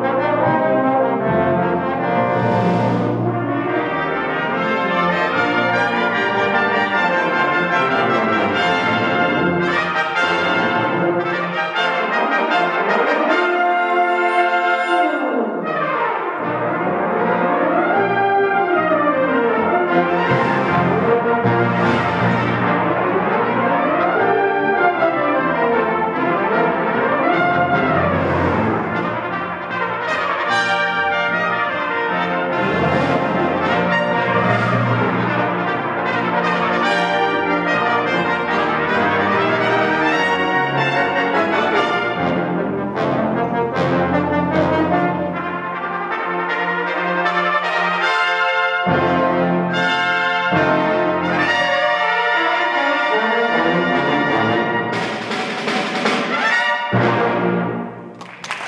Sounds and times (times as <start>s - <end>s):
Trumpet: 0.0s - 58.6s.